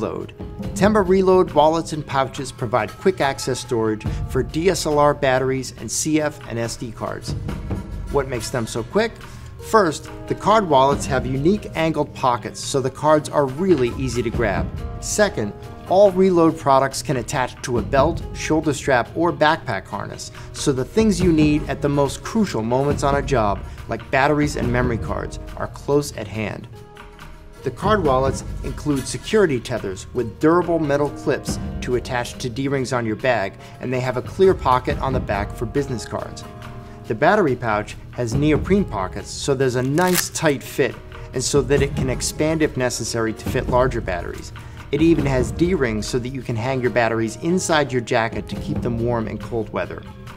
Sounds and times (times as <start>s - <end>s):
Speech: 0.0s - 7.3s, 8.2s - 26.7s, 27.6s - 36.5s, 37.1s - 50.1s
Music: 0.0s - 50.3s.